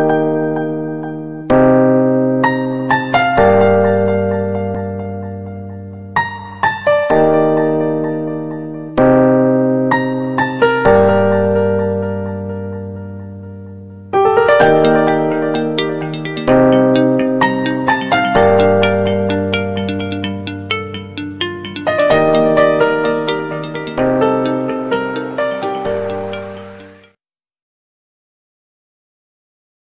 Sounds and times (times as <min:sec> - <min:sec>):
Theme music: 0:14.2 - 0:27.2.